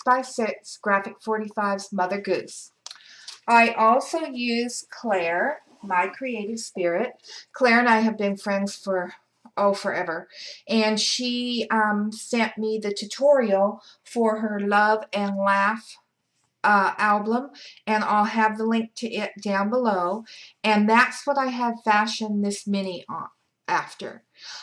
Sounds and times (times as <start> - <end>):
Speech: 0.0 - 16.0, 16.7 - 24.6.